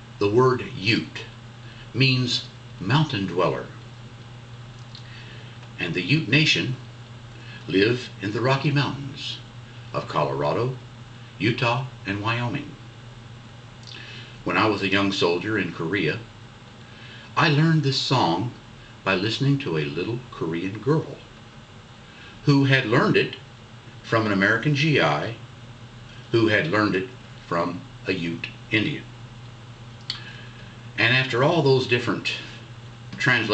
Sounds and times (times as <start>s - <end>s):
Speech: 0.2s - 3.8s, 5.8s - 6.9s, 7.6s - 10.8s, 11.4s - 12.8s, 14.4s - 16.3s, 17.4s - 21.3s, 22.4s - 25.4s, 26.3s - 29.1s, 31.0s - 33.5s.